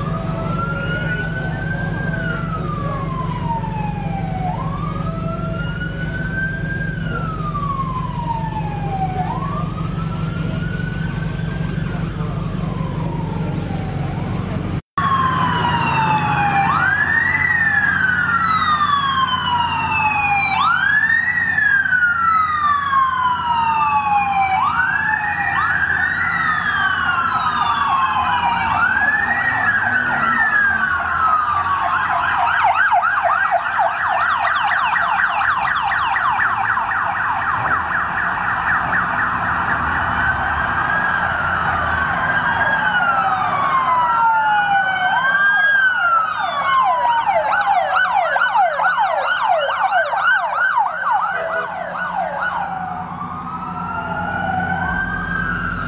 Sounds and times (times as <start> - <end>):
Police car (siren): 0.0 - 55.8.